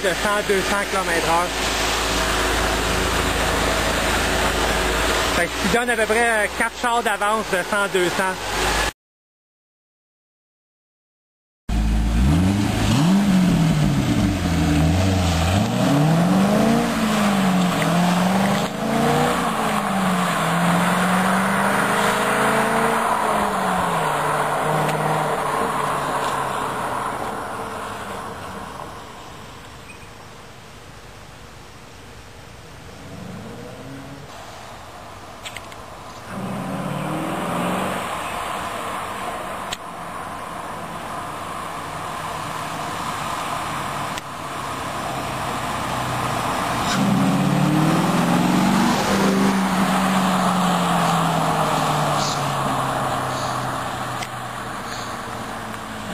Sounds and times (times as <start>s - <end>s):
Speech: 0.0s - 1.6s, 5.4s - 8.4s.